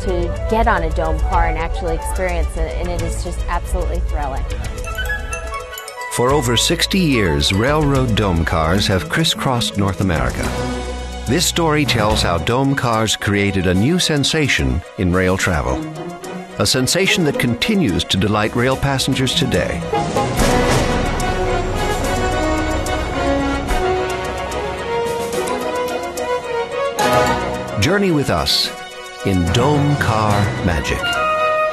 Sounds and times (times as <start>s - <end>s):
Speech: 0.0s - 4.4s, 6.2s - 10.5s, 11.3s - 15.8s, 16.6s - 19.8s, 27.8s - 31.2s
Music: 0.0s - 31.7s.